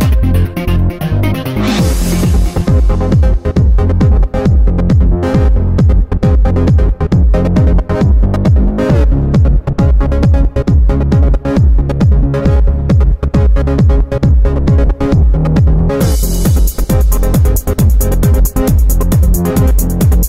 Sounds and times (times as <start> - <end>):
Music: 0.0 - 20.2.